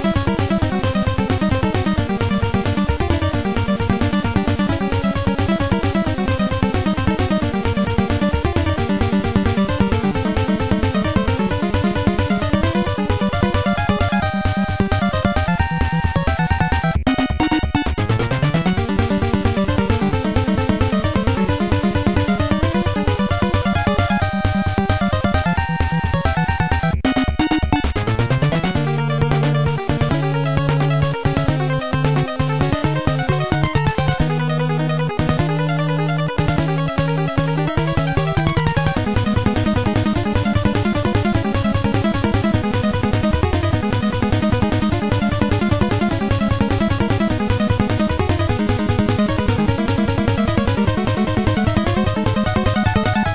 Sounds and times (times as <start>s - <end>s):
Soundtrack music: 0.0s - 53.3s.